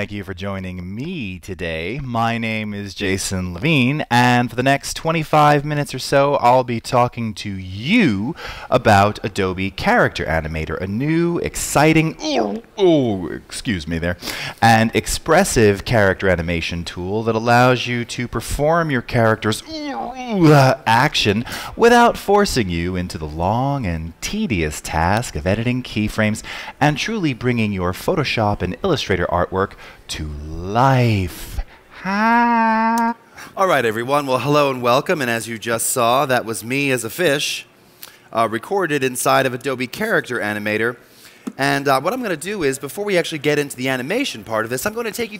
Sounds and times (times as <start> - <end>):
Speech: 0.0 - 37.7, 38.3 - 45.3.